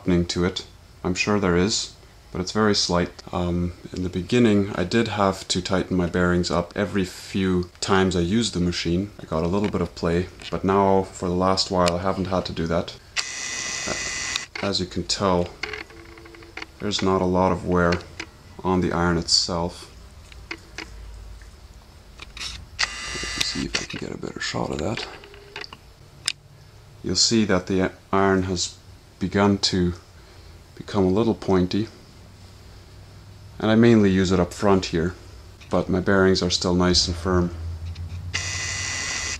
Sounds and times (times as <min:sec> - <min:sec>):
Speech: 0:00.0 - 0:13.0, 0:14.6 - 0:15.6, 0:16.8 - 0:18.0, 0:18.6 - 0:19.9, 0:23.4 - 0:25.2, 0:27.0 - 0:30.0, 0:30.8 - 0:32.0, 0:33.6 - 0:37.6.